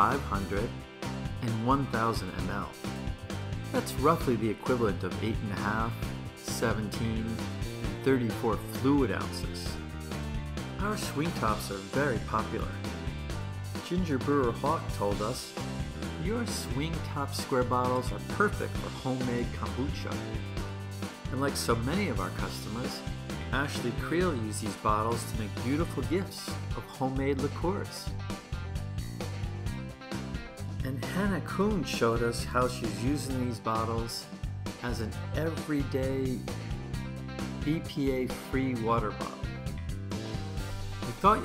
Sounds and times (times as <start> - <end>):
Speech: 0.0 - 0.8, 1.4 - 2.8, 3.7 - 9.8, 10.8 - 12.8, 13.8 - 20.4, 21.3 - 28.1, 30.8 - 36.5, 37.6 - 39.5, 41.0 - 41.4
Music: 0.0 - 41.4.